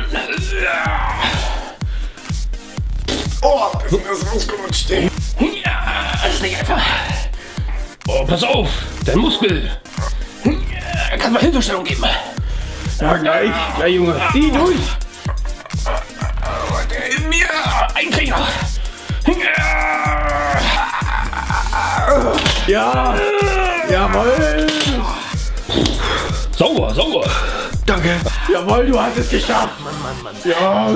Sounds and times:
Music: 0:00.0 - 0:30.9.

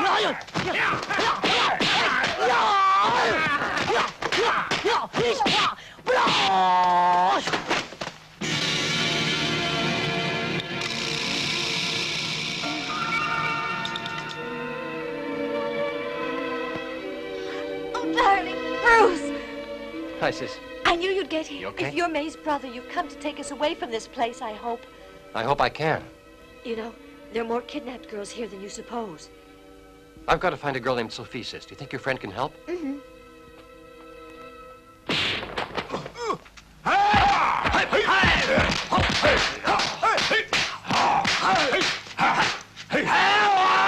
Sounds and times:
Music: 0:00.0 - 0:06.0, 0:08.2 - 0:43.8.

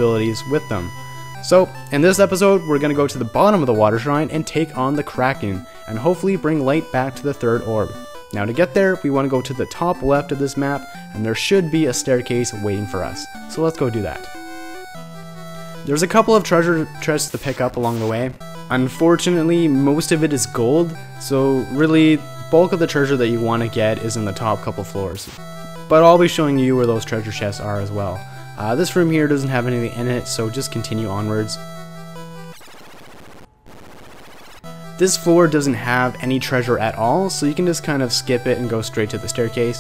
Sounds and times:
Speech: 0:00.0 - 0:00.9, 0:01.5 - 0:14.3, 0:15.9 - 0:25.3, 0:25.9 - 0:31.6, 0:35.0 - 0:39.8
Music: 0:00.0 - 0:32.6, 0:34.7 - 0:39.8.

